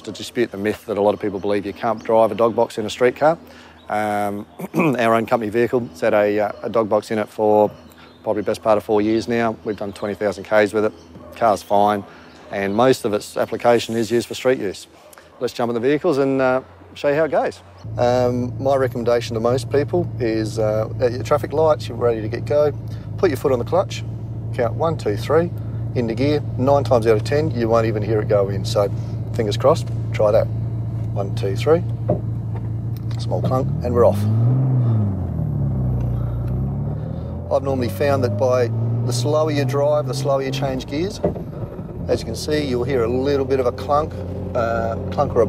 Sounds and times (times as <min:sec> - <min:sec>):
Speech: 0:00.0 - 0:30.5, 0:31.1 - 0:31.9, 0:33.1 - 0:34.3, 0:37.5 - 0:41.2, 0:42.0 - 0:45.4.